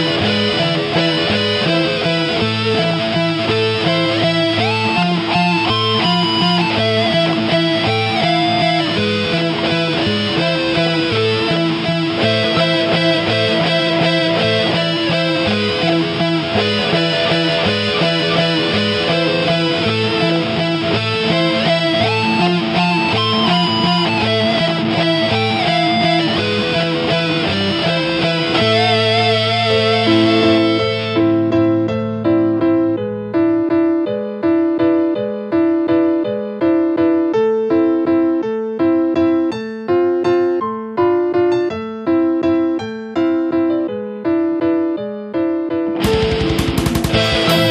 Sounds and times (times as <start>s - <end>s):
Electric guitar: 0.0s - 47.7s.